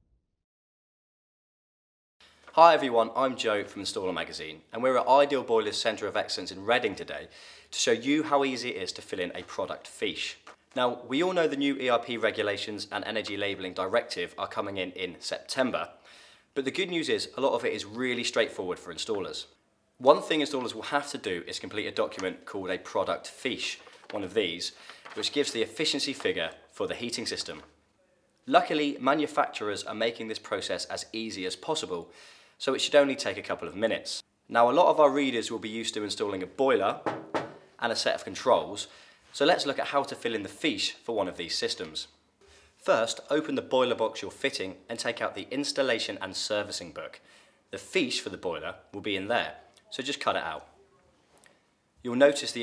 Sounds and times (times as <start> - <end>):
Speech: 2.6 - 16.0, 16.6 - 27.7, 28.5 - 37.0, 37.8 - 42.2, 42.8 - 51.1, 52.0 - 52.6.